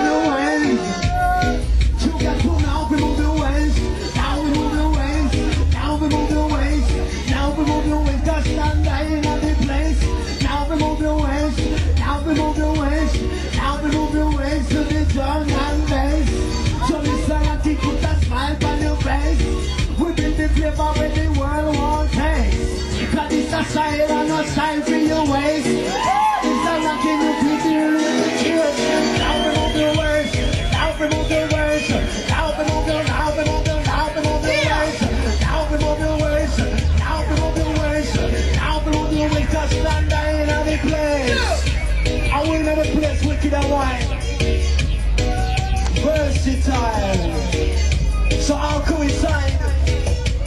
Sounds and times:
Music: 0:00.0 - 0:50.4
Speech: 0:15.3 - 0:22.4.

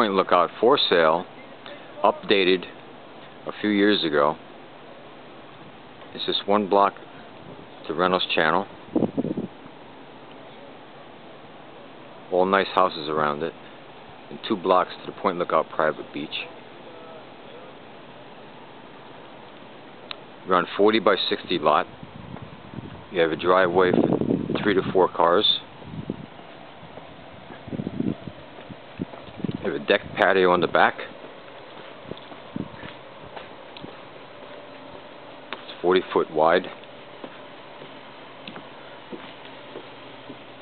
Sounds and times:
Speech: 0:00.0 - 0:02.8, 0:03.4 - 0:04.4, 0:06.1 - 0:08.7, 0:12.3 - 0:13.6, 0:14.3 - 0:17.8, 0:20.5 - 0:21.9, 0:23.1 - 0:25.7, 0:29.6 - 0:31.2, 0:35.7 - 0:36.8
Walk, footsteps: 0:31.2 - 0:35.8, 0:36.7 - 0:40.5.

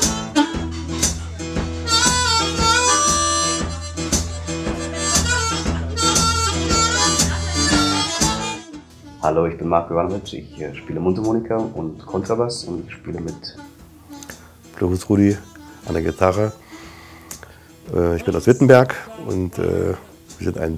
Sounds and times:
Blues: 0:00.0 - 0:18.3
Guitar: 0:00.0 - 0:20.7
Speech: 0:09.2 - 0:13.7, 0:14.8 - 0:16.6, 0:17.9 - 0:20.7.

